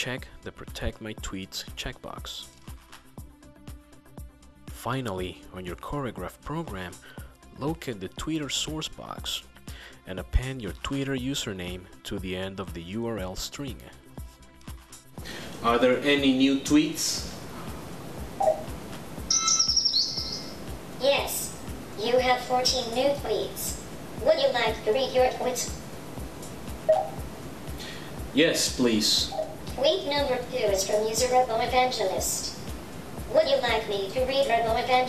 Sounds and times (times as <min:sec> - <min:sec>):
Speech: 0:00.0 - 0:02.5, 0:04.8 - 0:07.0, 0:07.6 - 0:09.4, 0:10.1 - 0:14.0, 0:15.6 - 0:17.4, 0:21.0 - 0:25.8, 0:28.4 - 0:32.5, 0:33.3 - 0:35.0
Music: 0:00.0 - 0:35.0.